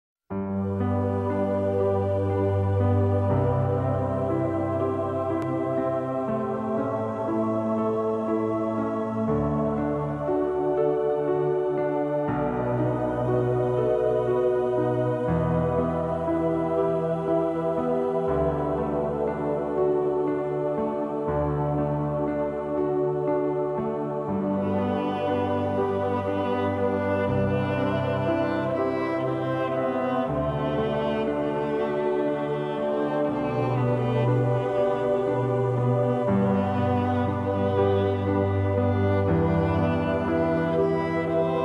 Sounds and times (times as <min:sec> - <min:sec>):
Music: 0:00.3 - 0:41.6.